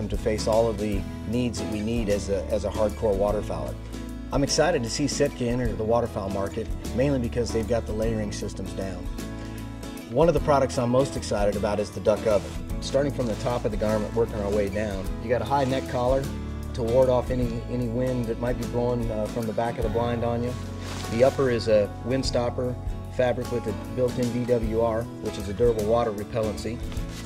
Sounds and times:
Speech: 0:00.0 - 0:09.1, 0:10.1 - 0:26.8
Music: 0:00.0 - 0:27.2.

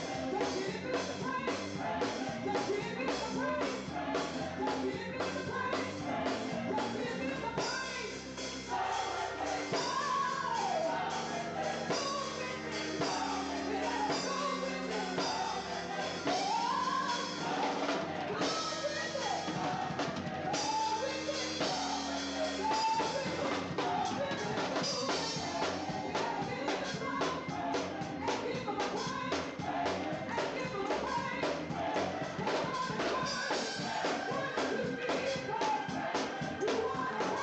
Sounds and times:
Choir: 0:00.0 - 0:37.4.

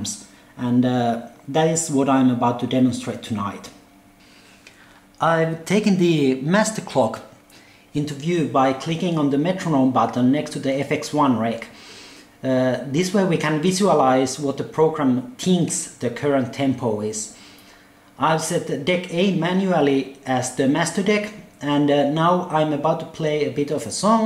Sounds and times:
Speech: 0:00.0 - 0:03.8, 0:05.2 - 0:11.8, 0:12.4 - 0:17.4, 0:18.2 - 0:24.2.

